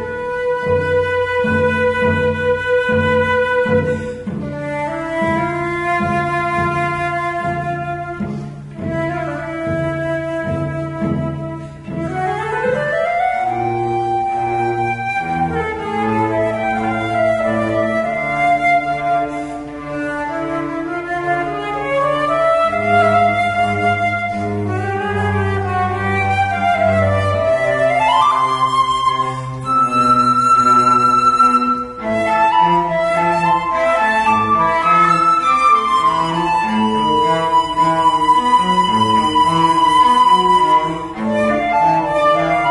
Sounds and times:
Cello: 0.0 - 42.7
Flute: 0.0 - 42.7.

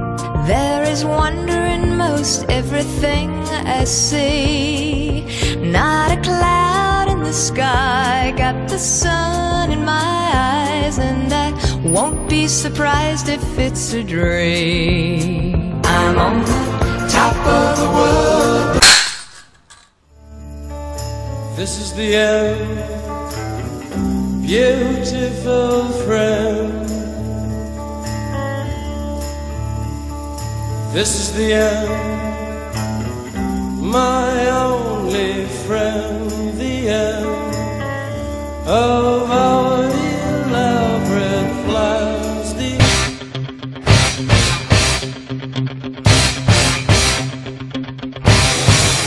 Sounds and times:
Music: 0.0 - 18.9, 20.1 - 49.0.

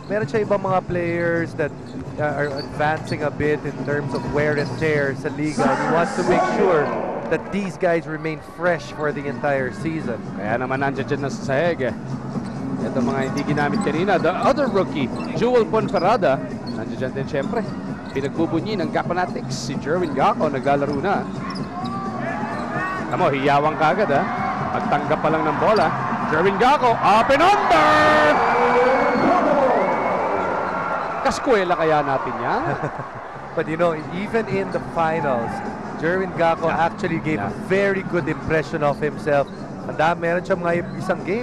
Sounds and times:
Music: 0.0 - 41.4
Speech: 12.8 - 17.6.

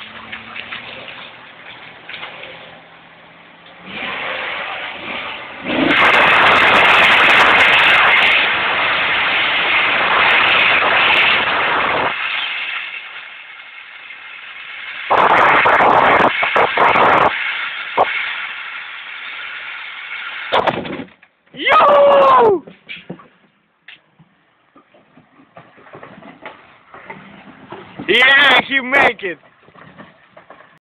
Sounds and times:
Speech: 28.1 - 29.4.

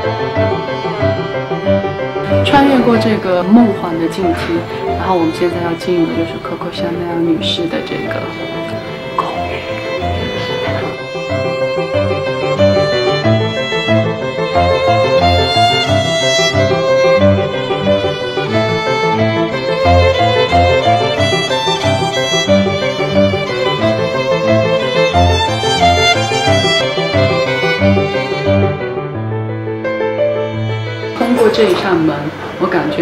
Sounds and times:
Violin, fiddle: 0.0 - 29.2, 30.2 - 33.0.

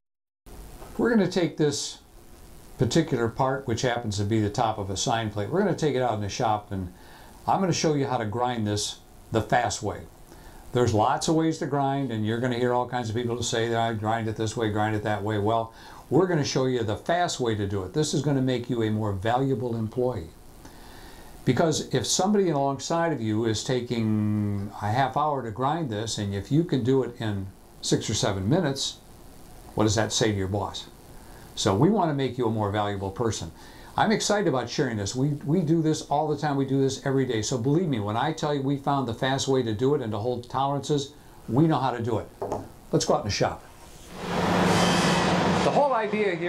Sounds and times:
Speech: 1.0 - 2.1, 2.8 - 10.1, 10.7 - 20.4, 21.4 - 29.0, 29.8 - 31.0, 31.6 - 43.6, 45.7 - 46.4.

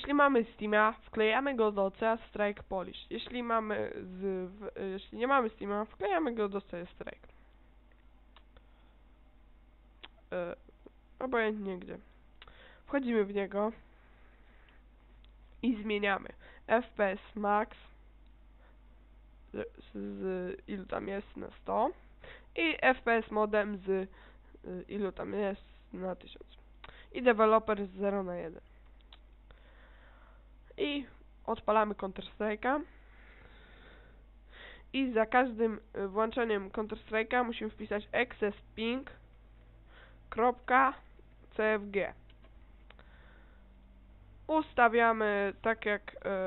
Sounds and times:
Speech: 0.0 - 7.3, 10.3 - 12.1, 12.9 - 13.8, 15.6 - 18.0, 19.5 - 22.0, 22.6 - 28.7, 30.8 - 32.9, 34.9 - 39.2, 40.3 - 42.2, 44.5 - 46.4.

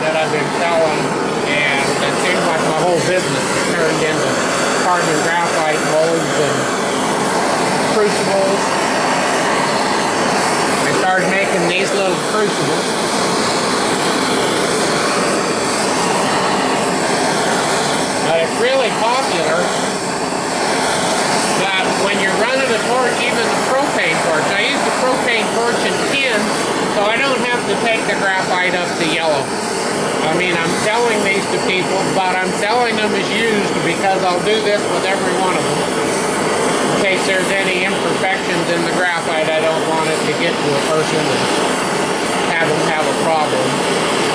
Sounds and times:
Speech: 0.0 - 6.8, 7.9 - 8.7, 10.8 - 12.9, 18.2 - 19.8, 21.5 - 29.5, 30.2 - 35.9, 36.9 - 41.6, 42.4 - 43.8.

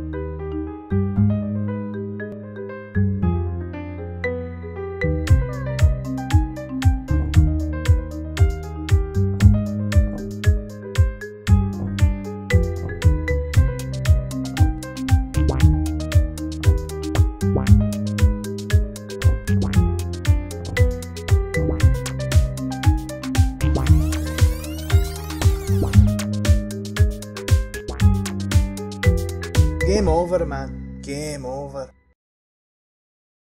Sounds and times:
Music: 0.0 - 32.2
Speech: 29.8 - 32.0.

